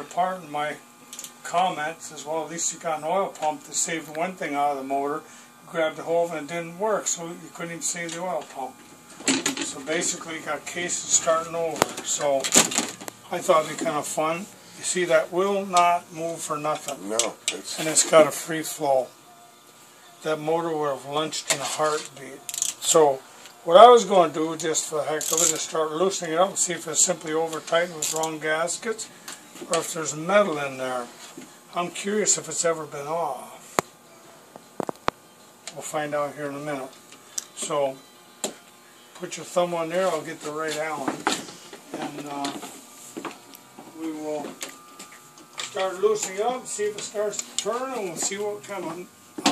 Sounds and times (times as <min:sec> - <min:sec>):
Speech: 0:00.0 - 0:00.8, 0:01.4 - 0:08.8, 0:09.6 - 0:12.5, 0:13.3 - 0:19.1, 0:20.2 - 0:29.1, 0:29.7 - 0:31.1, 0:31.7 - 0:33.6, 0:35.7 - 0:37.0, 0:37.6 - 0:38.0, 0:39.2 - 0:41.2, 0:41.9 - 0:42.6, 0:43.9 - 0:44.6, 0:45.7 - 0:49.1.